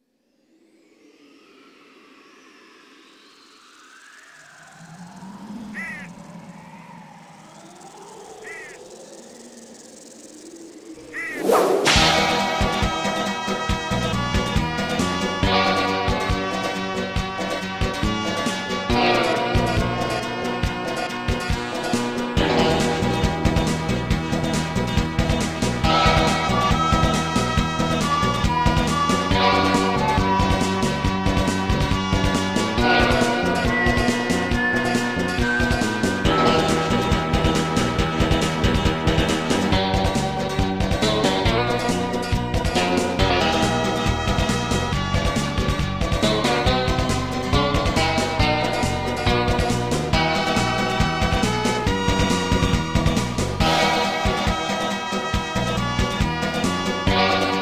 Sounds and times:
Music: 11.2s - 57.6s.

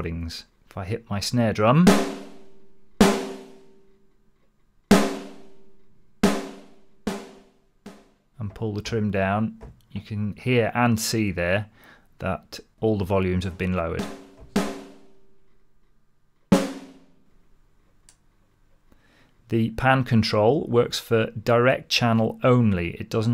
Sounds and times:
Rimshot: 1.9s - 3.8s, 4.9s - 8.0s, 14.0s - 15.2s, 16.6s - 17.1s.

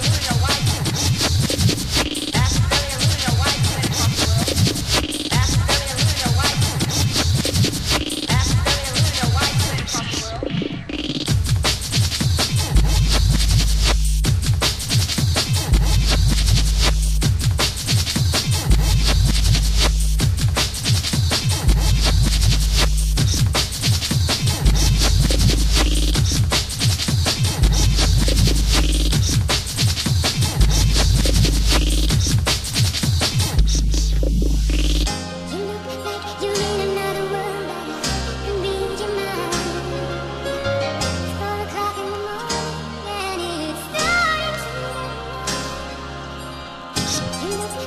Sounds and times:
Music: 0.0s - 47.8s.

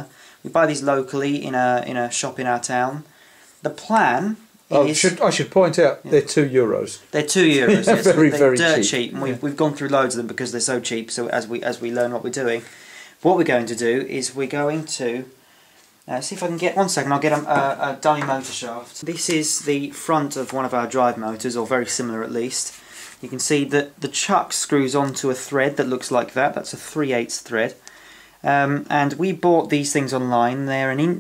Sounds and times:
Speech: 0.0s - 15.4s, 16.1s - 27.8s, 28.4s - 31.2s.

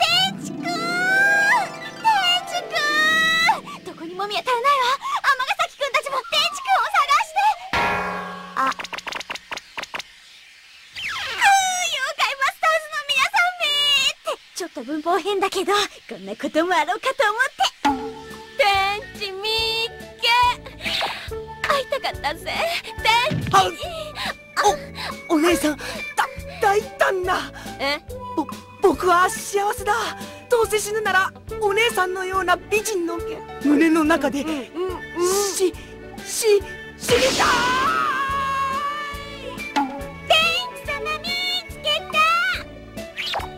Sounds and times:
Speech: 0.0s - 7.6s, 11.4s - 17.7s, 18.6s - 20.6s, 21.6s - 24.1s, 25.3s - 39.4s, 40.3s - 42.6s
Music: 0.0s - 9.0s, 17.8s - 43.5s.

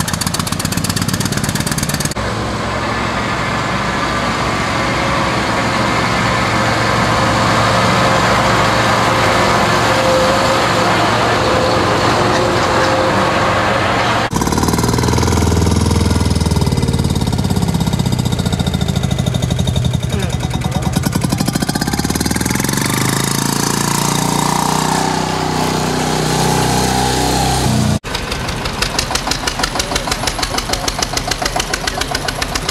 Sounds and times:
Motor vehicle (road): 0.0s - 32.7s
Speech: 20.1s - 21.0s.

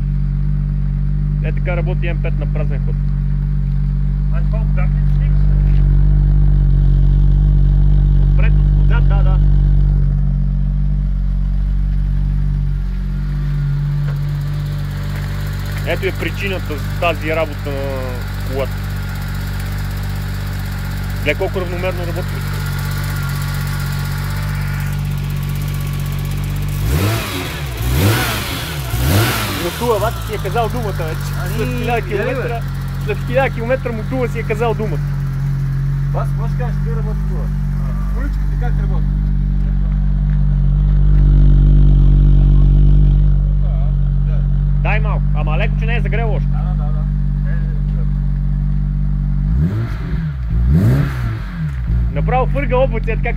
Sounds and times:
Speech: 1.4s - 3.0s, 4.3s - 5.8s, 8.4s - 9.5s, 15.8s - 18.8s, 21.2s - 22.6s, 29.6s - 35.1s, 36.1s - 39.1s, 43.5s - 48.2s, 52.1s - 53.3s
Walk, footsteps: 11.8s - 14.2s, 15.1s - 15.9s, 39.6s - 40.5s.

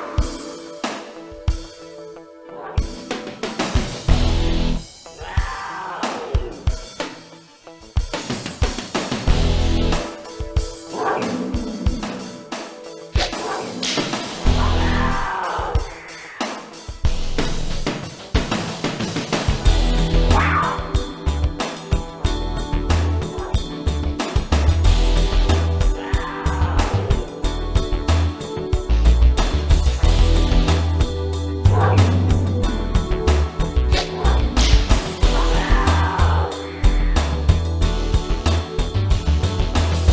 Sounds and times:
Music: 0.0s - 40.1s.

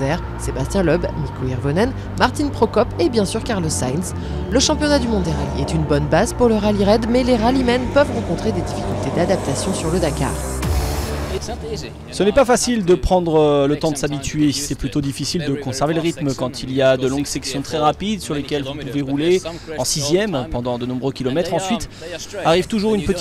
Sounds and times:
Speech: 0.0s - 10.4s, 11.3s - 23.2s
Music: 0.0s - 14.0s.

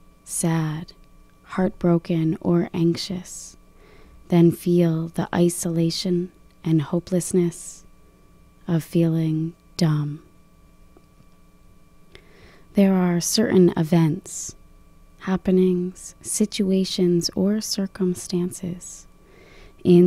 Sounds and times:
Speech: 0.3s - 3.6s, 4.3s - 7.8s, 8.7s - 10.3s, 12.8s - 14.6s, 15.2s - 19.1s, 19.8s - 20.0s.

